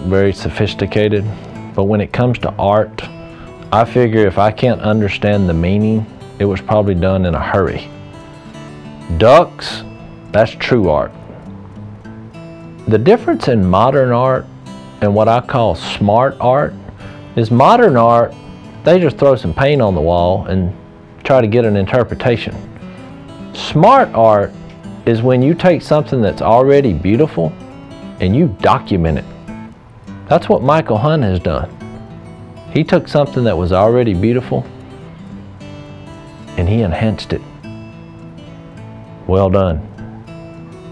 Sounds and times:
Speech: 0.0 - 3.1, 3.7 - 7.9, 9.1 - 11.2, 12.9 - 14.4, 15.0 - 16.8, 17.4 - 22.6, 23.6 - 27.6, 28.2 - 29.3, 30.3 - 31.7, 32.7 - 34.7, 36.6 - 37.5, 39.3 - 39.9
Music: 0.0 - 40.9.

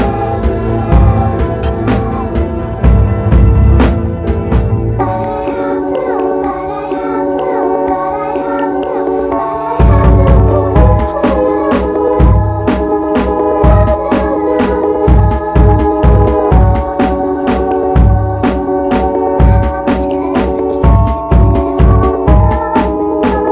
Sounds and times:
Music: 0.0 - 23.5.

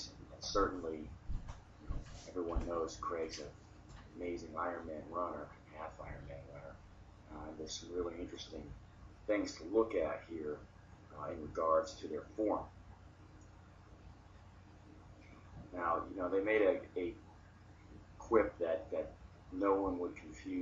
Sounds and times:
Speech: 0.0 - 1.1, 2.2 - 3.6, 4.2 - 8.7, 9.3 - 12.7, 15.7 - 17.2, 18.2 - 20.6.

